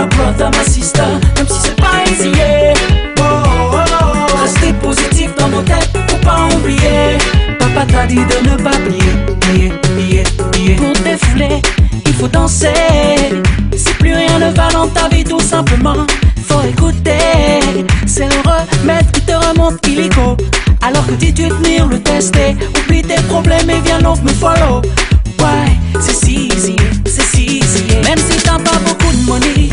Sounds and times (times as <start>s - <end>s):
Music of Africa: 0.0s - 29.7s.